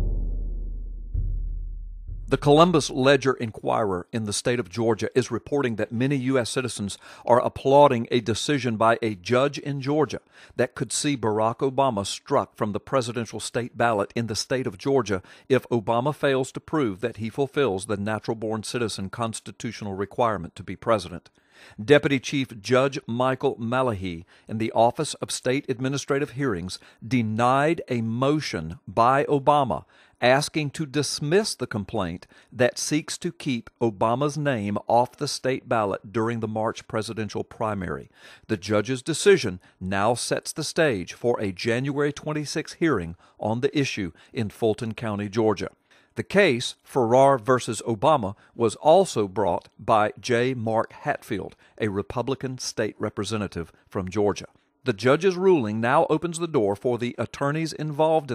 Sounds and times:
Speech: 0:02.3 - 0:58.3.

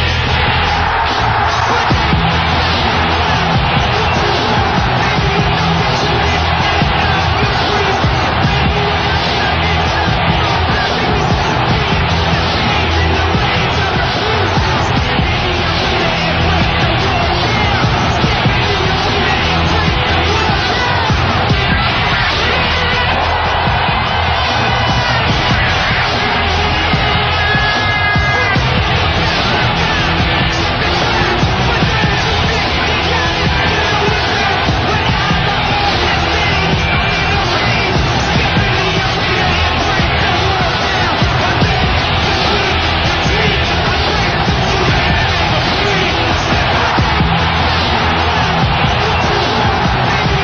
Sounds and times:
Music: 0:00.0 - 0:50.4.

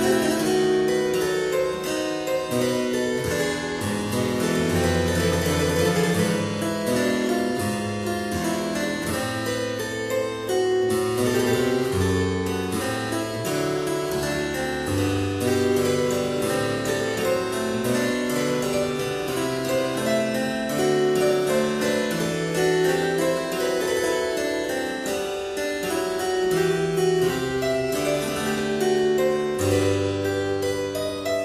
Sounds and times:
Harpsichord: 0:00.0 - 0:31.4.

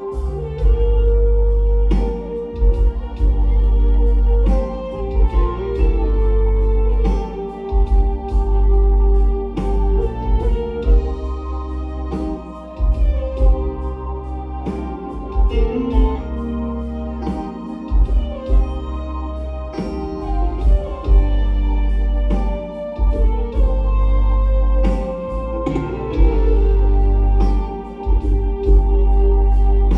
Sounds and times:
Inside, large room or hall: 0:00.0 - 0:29.9
Music: 0:00.0 - 0:29.9.

